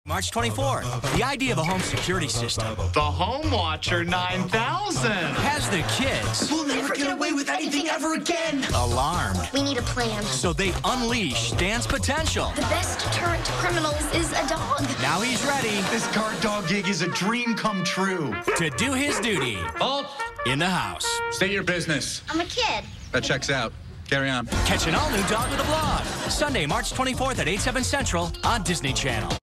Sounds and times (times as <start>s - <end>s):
Music: 0.1s - 21.8s, 24.5s - 29.4s
Speech: 0.1s - 22.6s, 23.2s - 29.4s.